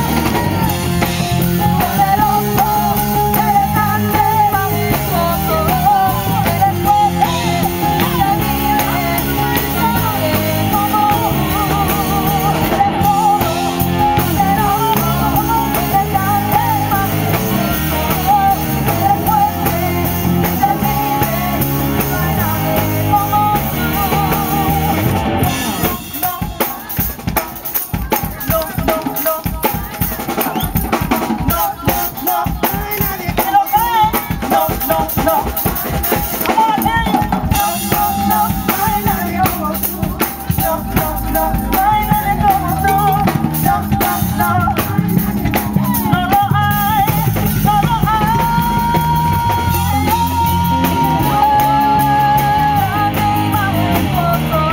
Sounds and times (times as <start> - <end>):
Female singing: 0.0 - 54.7
Music: 0.0 - 54.7.